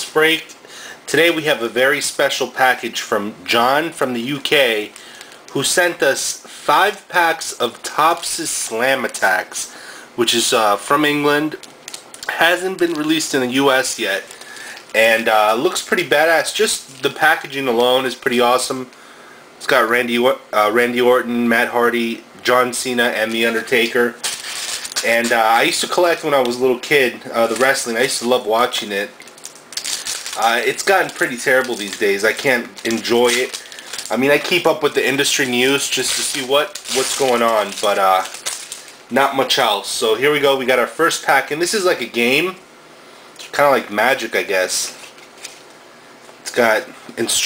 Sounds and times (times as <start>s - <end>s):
Speech: 0.0s - 0.5s, 1.1s - 11.6s, 12.2s - 14.3s, 14.9s - 18.9s, 19.6s - 24.2s, 25.0s - 29.2s, 30.3s - 38.4s, 39.1s - 42.6s, 43.4s - 45.0s, 46.4s - 47.4s.